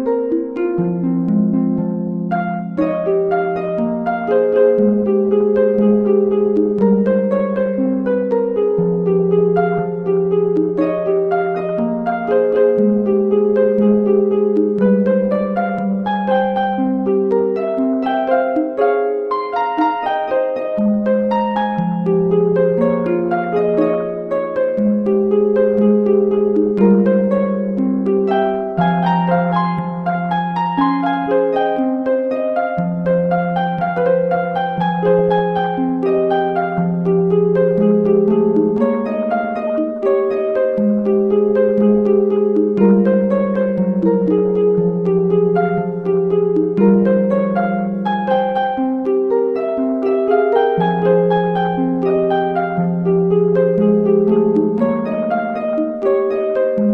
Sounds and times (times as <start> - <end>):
Harp: 0.0 - 56.9.